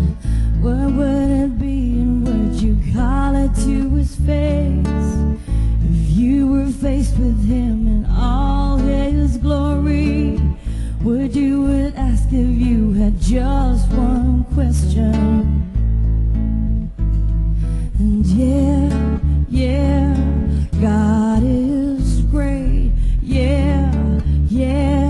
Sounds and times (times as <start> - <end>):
Acoustic guitar: 0.0 - 25.0
Strum: 0.0 - 25.0.